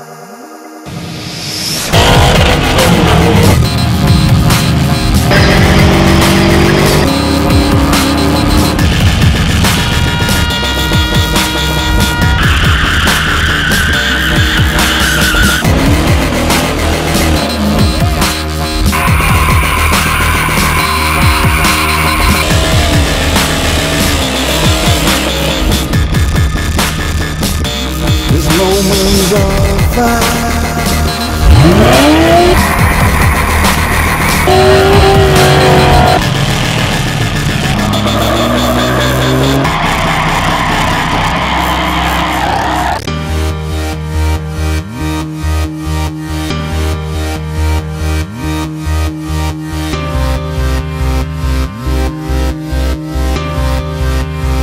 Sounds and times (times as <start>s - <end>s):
Music: 0.0s - 54.6s
Vehicle: 1.7s - 43.1s.